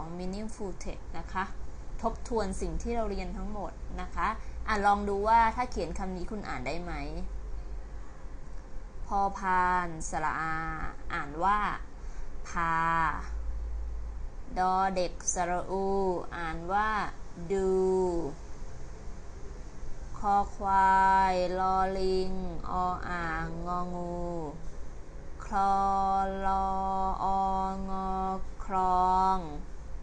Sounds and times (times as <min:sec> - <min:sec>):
Speech: 0:00.0 - 0:07.3, 0:09.1 - 0:11.9, 0:12.5 - 0:13.4, 0:14.5 - 0:18.4, 0:20.2 - 0:24.6, 0:25.4 - 0:29.6.